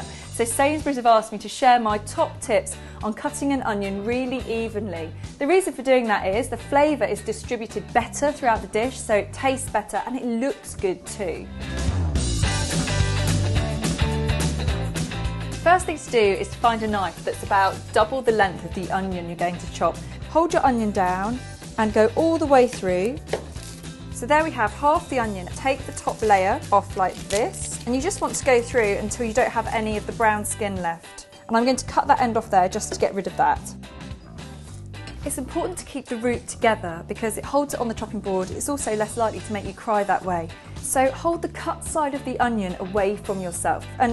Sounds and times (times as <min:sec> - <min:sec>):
Chopping (food): 0:23.3 - 0:23.7.